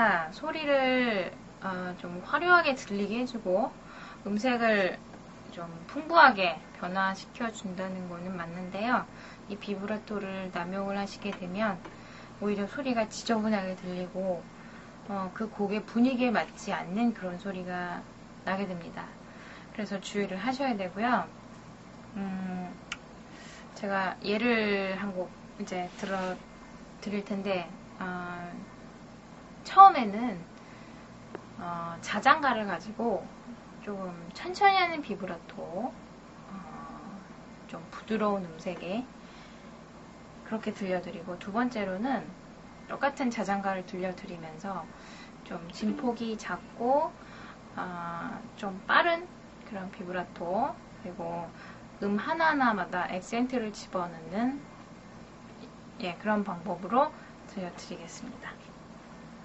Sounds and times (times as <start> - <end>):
Speech: 0.0 - 14.5, 15.1 - 19.2, 19.8 - 21.3, 22.2 - 22.8, 23.8 - 26.4, 27.0 - 28.7, 29.7 - 30.5, 31.6 - 39.1, 40.4 - 44.9, 45.5 - 47.2, 47.8 - 54.6, 56.0 - 58.7.